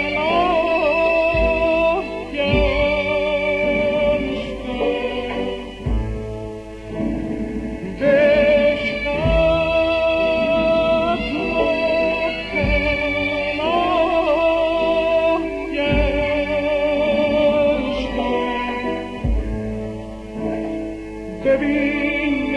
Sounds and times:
Music: 0.0 - 22.5.

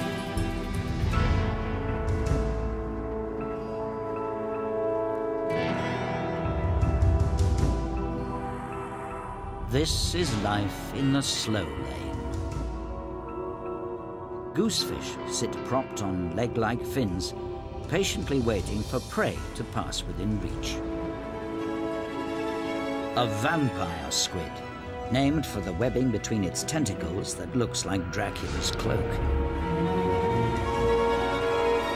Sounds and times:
Music: 0.0 - 31.9
Speech: 9.7 - 12.2, 14.6 - 20.8, 23.2 - 29.2.

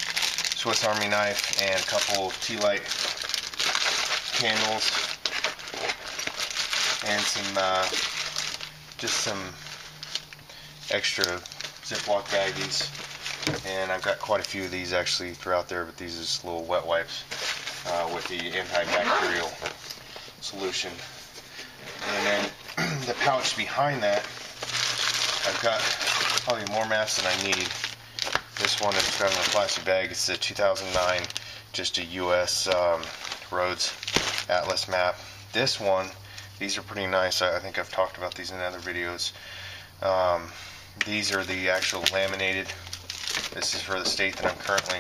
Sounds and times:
Speech: 0.6 - 3.0, 4.4 - 5.0, 7.0 - 8.0, 9.0 - 9.6, 10.9 - 12.9, 13.6 - 19.6, 20.4 - 21.1, 22.0 - 24.3, 25.4 - 27.8, 28.6 - 39.4, 40.0 - 42.8, 43.6 - 45.0.

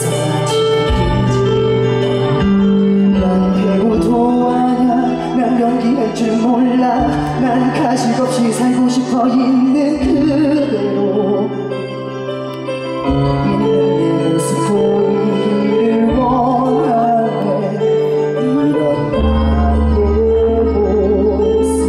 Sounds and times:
Pop music: 0.0 - 21.8.

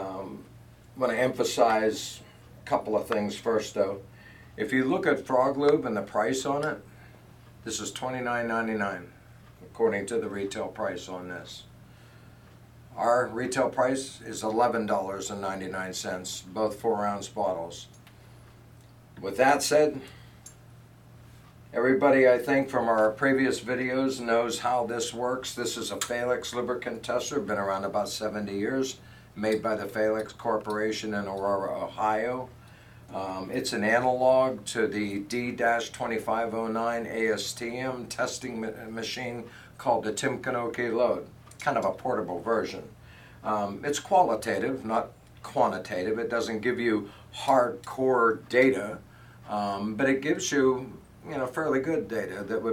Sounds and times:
Speech: 0.0 - 6.9, 7.6 - 11.7, 12.9 - 18.0, 19.2 - 20.2, 21.7 - 52.7.

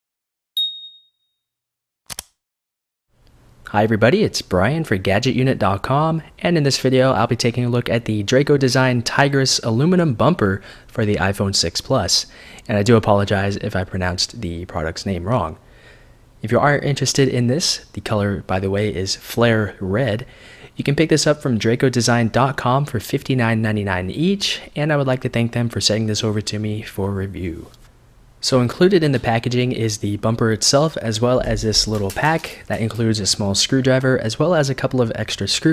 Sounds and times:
Speech: 3.7 - 15.6, 16.4 - 27.8, 28.4 - 35.7.

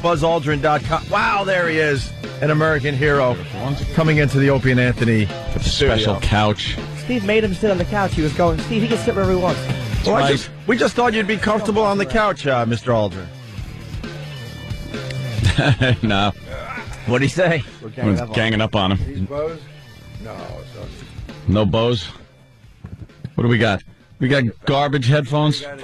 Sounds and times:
Speech: 0.0 - 13.3, 17.1 - 19.6, 23.4 - 25.8
Music: 0.0 - 25.8.

